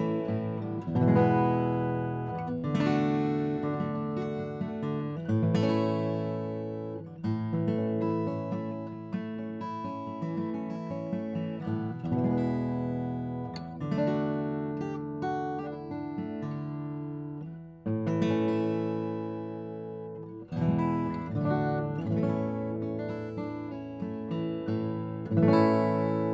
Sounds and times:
Acoustic guitar: 0:00.0 - 0:26.3.

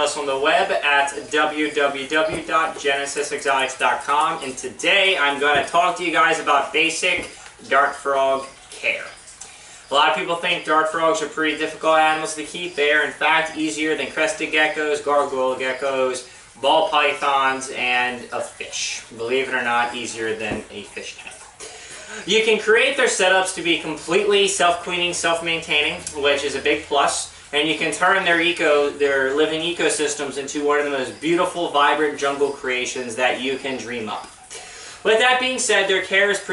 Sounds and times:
Speech: 0:00.0 - 0:09.2, 0:09.9 - 0:21.5, 0:22.1 - 0:34.4, 0:35.0 - 0:36.5.

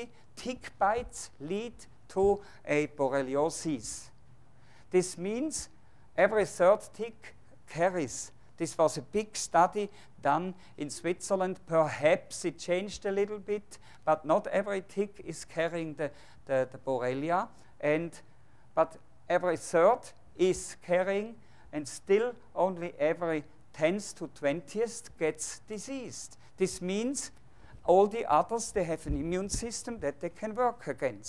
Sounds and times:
Speech: 0:00.0 - 0:04.2, 0:04.9 - 0:31.2.

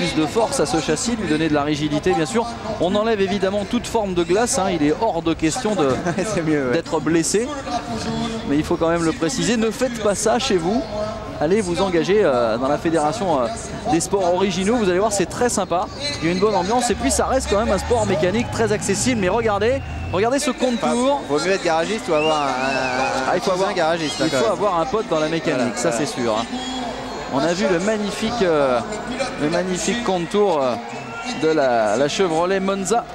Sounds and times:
Speech: 0:00.0 - 0:33.1.

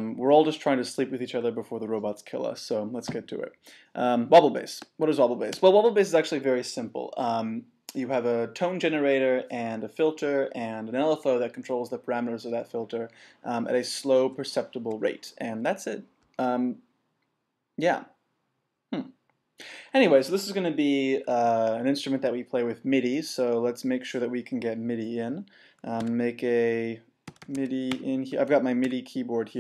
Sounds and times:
Speech: 0:00.0 - 0:16.8, 0:17.8 - 0:18.2, 0:19.9 - 0:29.6.

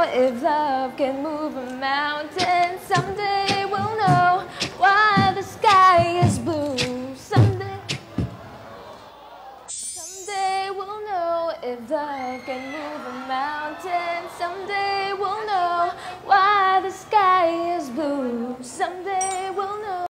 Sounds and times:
Female singing: 0:00.0 - 0:08.0, 0:10.2 - 0:20.1.

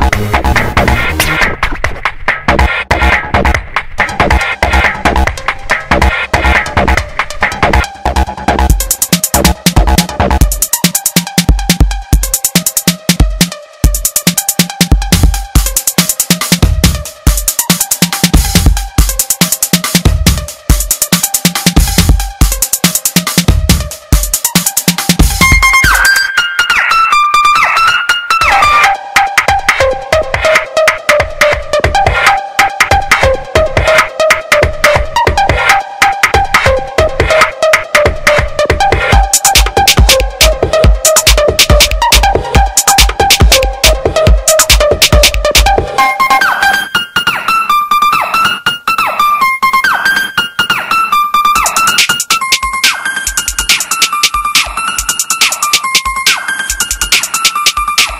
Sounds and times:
Electronic music: 0:00.0 - 0:58.1.

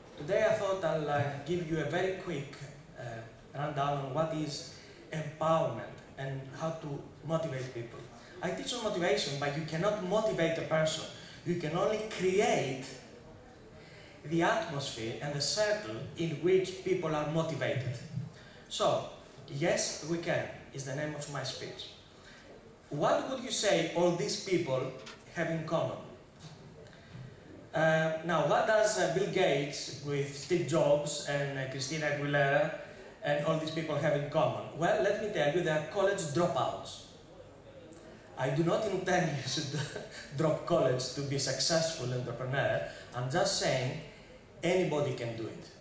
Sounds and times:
Narration, monologue: 0:00.0 - 0:45.8
Male speech, man speaking: 0:00.2 - 0:13.2, 0:14.2 - 0:22.0, 0:22.9 - 0:26.2, 0:27.7 - 0:45.8.

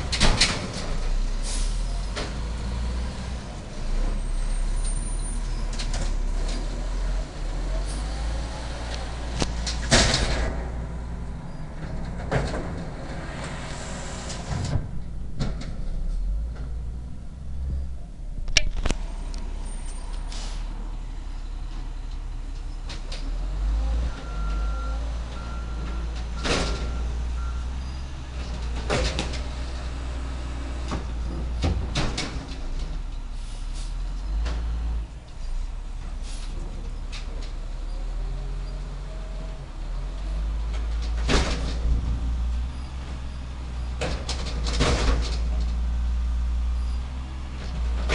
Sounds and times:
Truck: 0:00.0 - 0:48.1.

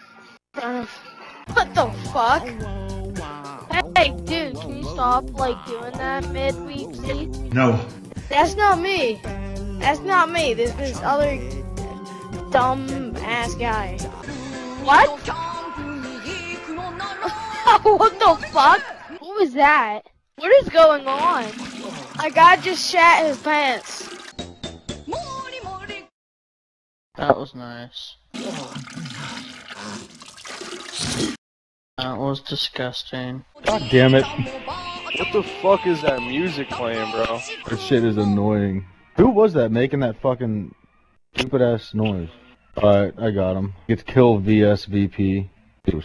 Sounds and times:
Music: 0:00.0 - 0:18.9, 0:20.8 - 0:26.1, 0:33.6 - 0:40.0
Speech: 0:03.7 - 0:09.2, 0:12.5 - 0:14.0, 0:22.2 - 0:24.1, 0:32.0 - 0:40.7, 0:41.4 - 0:46.0.

